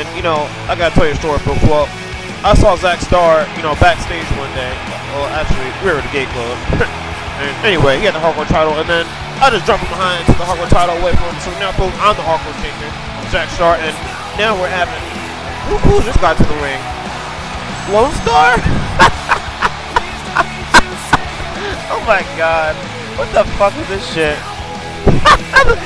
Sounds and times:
Speech: 0.0s - 15.1s, 15.7s - 16.8s, 17.9s - 18.6s, 21.7s - 24.4s
Music: 0.0s - 25.8s.

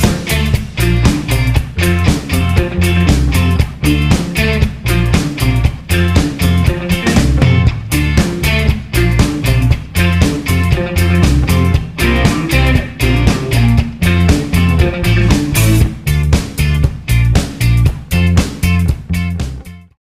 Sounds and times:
Music: 0.0s - 20.0s.

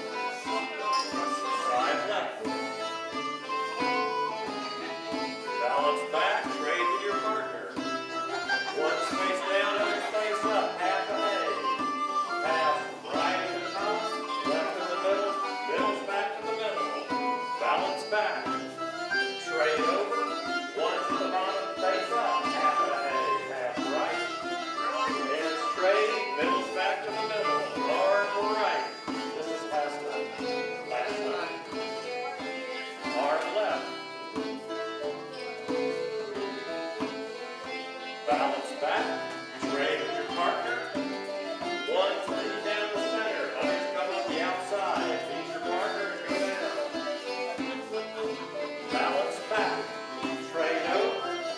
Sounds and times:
Banjo: 0.0s - 51.5s.

